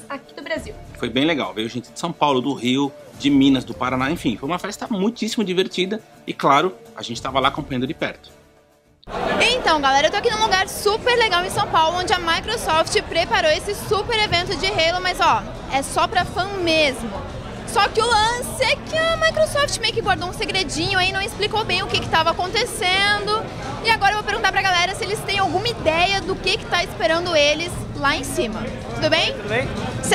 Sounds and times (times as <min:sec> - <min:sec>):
Inside, public space: 0:00.0 - 0:04.9, 0:09.0 - 0:30.1.